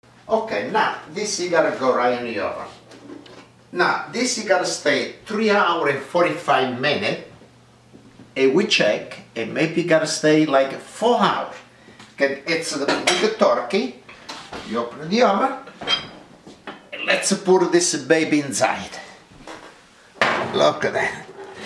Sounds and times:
Speech: 0.3 - 2.8, 3.7 - 7.4, 8.4 - 14.0, 14.7 - 15.7, 17.0 - 19.2, 20.4 - 21.3.

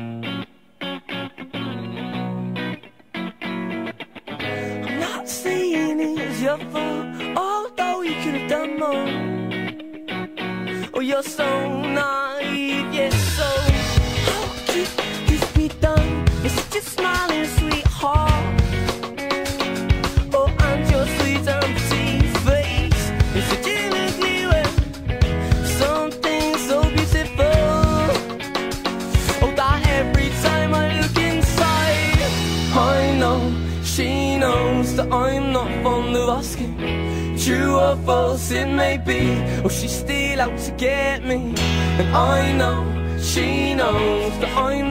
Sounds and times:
Independent music: 0.0 - 44.9.

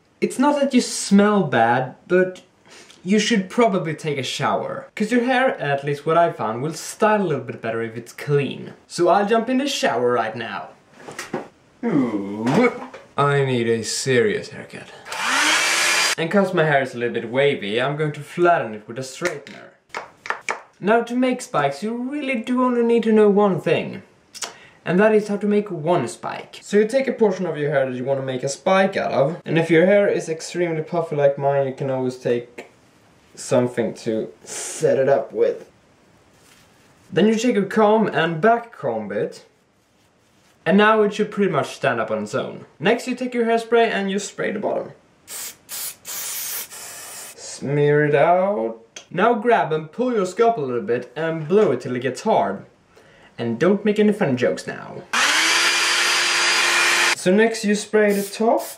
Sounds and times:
Speech: 0.2 - 10.8, 11.8 - 15.0, 16.2 - 19.8, 20.8 - 32.7, 33.3 - 35.7, 37.1 - 39.5, 40.6 - 45.0, 47.4 - 52.7, 53.4 - 55.1, 57.2 - 58.7.

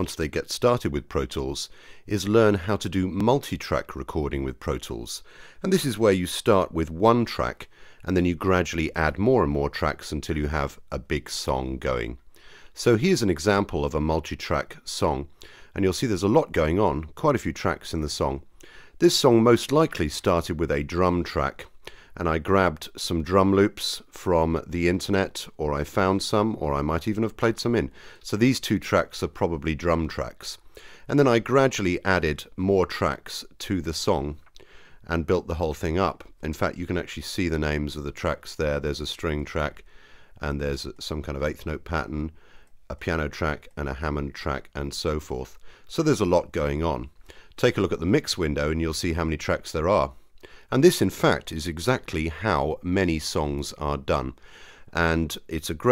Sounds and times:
Speech: 0.0 - 12.2, 12.8 - 34.5, 35.1 - 55.9.

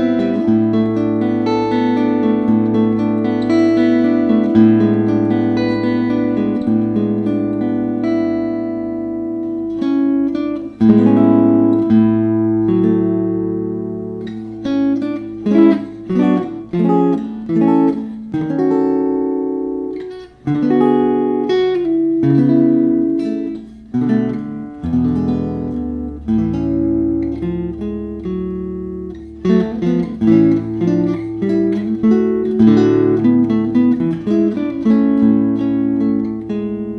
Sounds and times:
Electric guitar: 0.0 - 36.9.

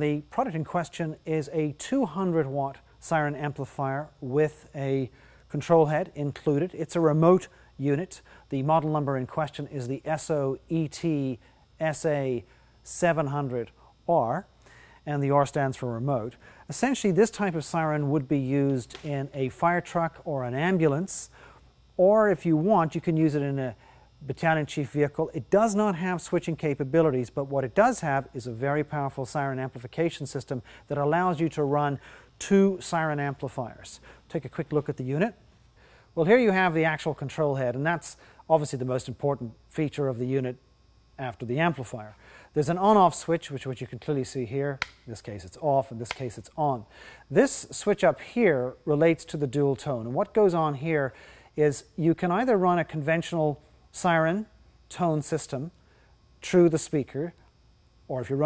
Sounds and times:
Speech: 0.0 - 21.4, 22.0 - 35.4, 36.2 - 40.6, 41.2 - 55.8, 56.4 - 57.4, 58.1 - 58.4.

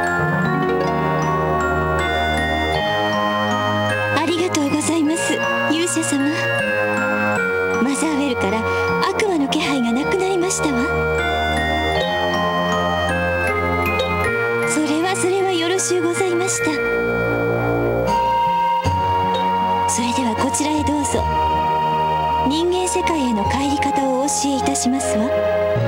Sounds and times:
Music: 0.0 - 25.8
Speech: 4.2 - 6.6, 7.8 - 11.0, 14.7 - 16.9, 19.9 - 21.4, 22.4 - 25.4.

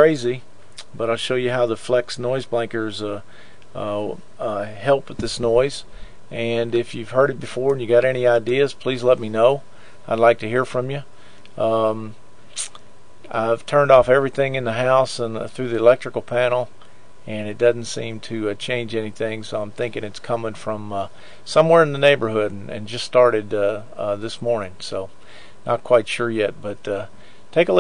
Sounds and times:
Speech: 0.0 - 27.8.

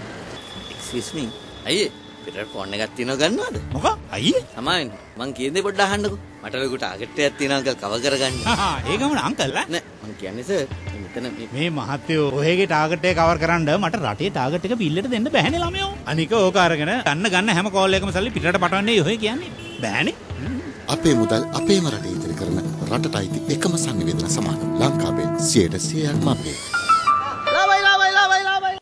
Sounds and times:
Music: 1.7 - 9.8, 10.4 - 16.8, 17.5 - 28.8
Speech: 20.9 - 26.6.

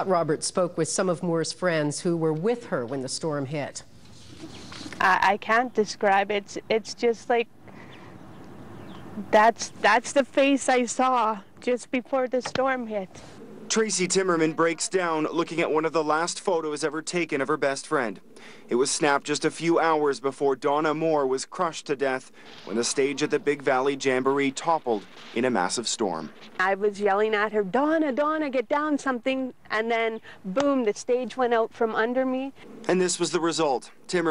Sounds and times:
Speech: 5.0 - 7.4, 9.2 - 13.1, 13.7 - 34.3.

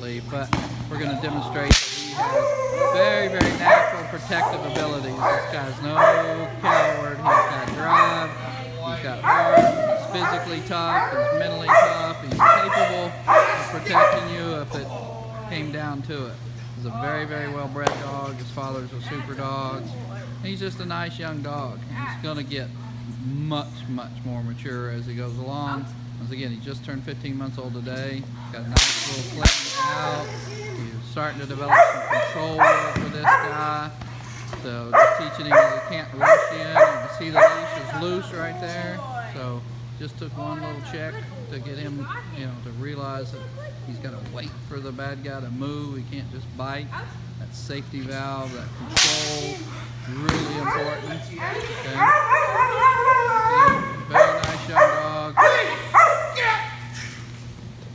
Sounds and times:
Bow-wow: 2.0 - 8.3, 9.2 - 14.4, 31.7 - 33.6, 34.9 - 38.0, 51.8 - 56.8
Yip: 9.3 - 14.3, 31.7 - 33.6, 35.0 - 37.9, 52.0 - 57.2.

